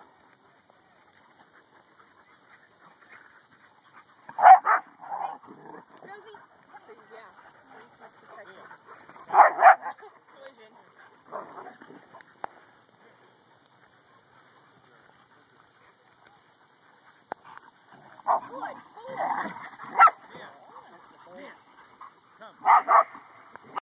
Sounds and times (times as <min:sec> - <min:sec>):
Bow-wow: 0:04.4 - 0:05.9, 0:09.2 - 0:10.0, 0:18.2 - 0:21.0, 0:22.6 - 0:23.2
Yip: 0:22.6 - 0:23.1.